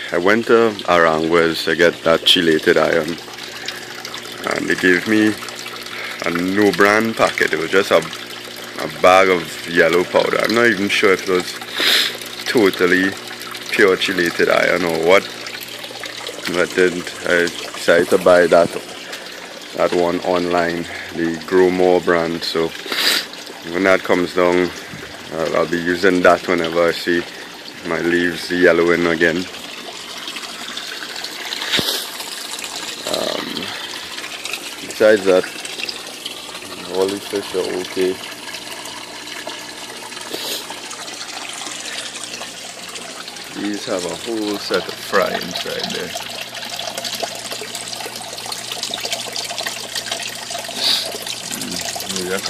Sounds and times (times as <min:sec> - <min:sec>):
Water: 0:00.0 - 0:52.5
Water tap, faucet: 0:00.0 - 0:52.5.